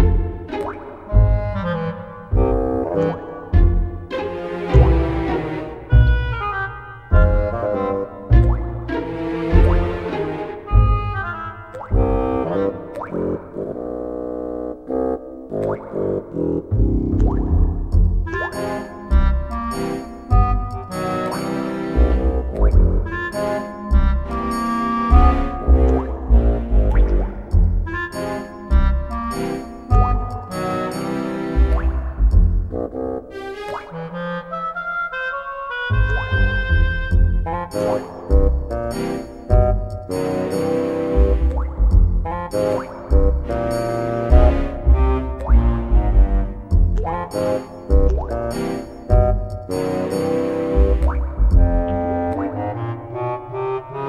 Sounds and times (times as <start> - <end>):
Music: 0.0 - 54.0.